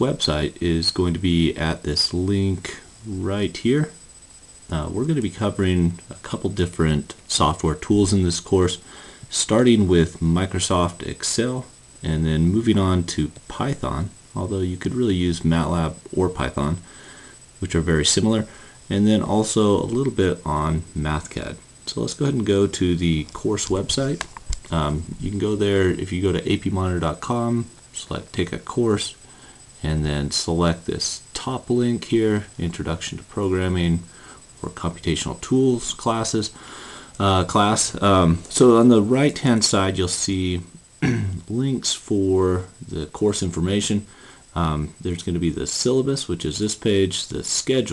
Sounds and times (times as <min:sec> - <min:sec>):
Speech: 0:00.0 - 0:04.0, 0:04.7 - 0:16.9, 0:17.6 - 0:29.2, 0:29.8 - 0:36.6, 0:37.2 - 0:47.9.